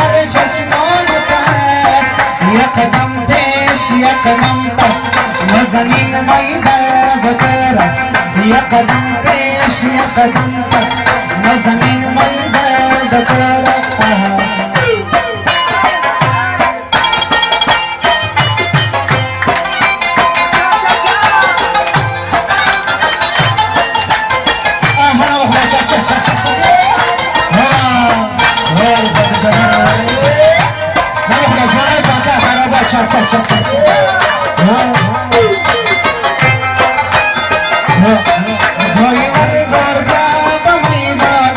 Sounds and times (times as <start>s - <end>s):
Music: 0.0s - 41.5s.